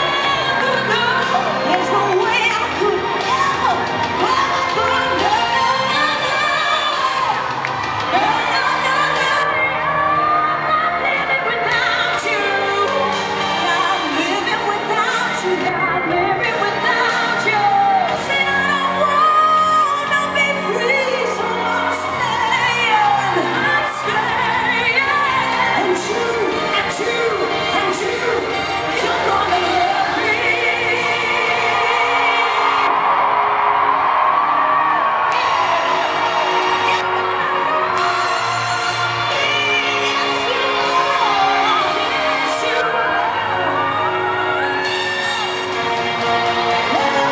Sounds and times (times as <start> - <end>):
Female singing: 0.0 - 33.0, 35.3 - 43.6, 46.7 - 47.3
Music: 0.0 - 47.3.